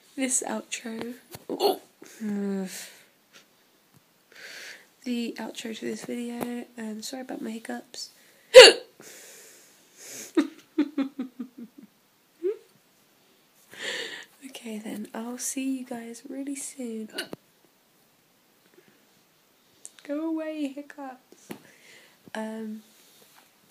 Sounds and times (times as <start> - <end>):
Speech: 0.2 - 1.2, 5.0 - 8.1, 14.4 - 17.2, 20.0 - 21.2, 22.4 - 22.8
Hiccup: 1.5 - 1.8, 8.6 - 8.9, 17.1 - 17.4.